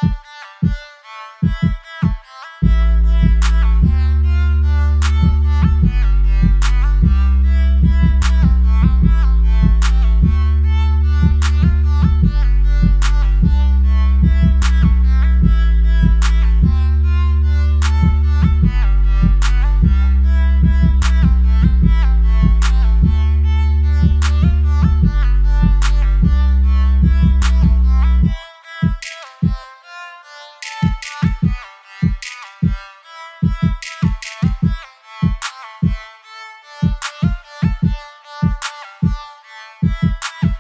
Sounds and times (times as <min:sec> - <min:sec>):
Drum: 0:00.0 - 0:00.8, 0:01.4 - 0:04.2, 0:04.9 - 0:17.0, 0:17.7 - 0:29.6, 0:30.6 - 0:32.8, 0:33.4 - 0:36.0, 0:36.8 - 0:39.2, 0:39.8 - 0:40.6.